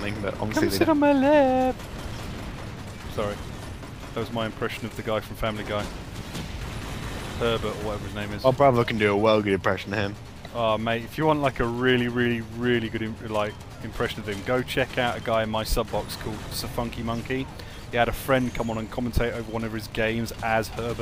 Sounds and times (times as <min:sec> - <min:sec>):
Speech: 0:00.0 - 0:01.7, 0:03.1 - 0:03.4, 0:04.2 - 0:05.9, 0:07.4 - 0:21.0.